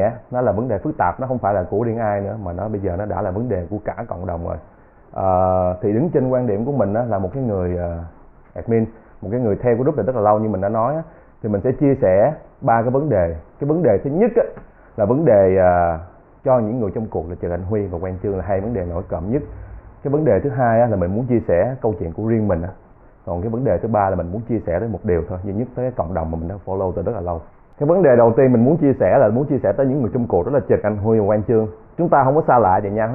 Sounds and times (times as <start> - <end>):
Speech: 0.0 - 33.1.